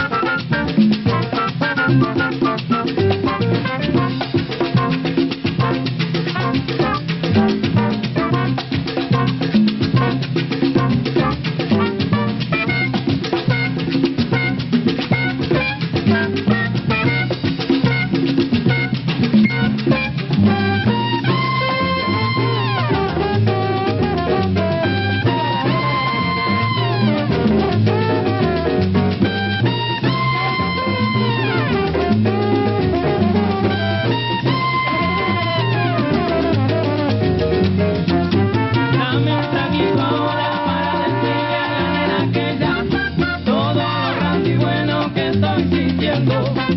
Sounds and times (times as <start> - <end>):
Swing music: 0.0 - 46.7.